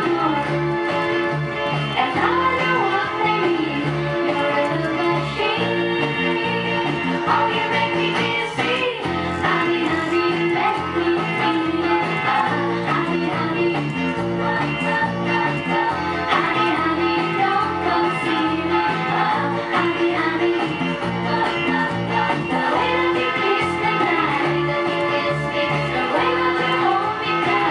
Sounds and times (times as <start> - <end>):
Bass guitar: 0.0 - 27.7.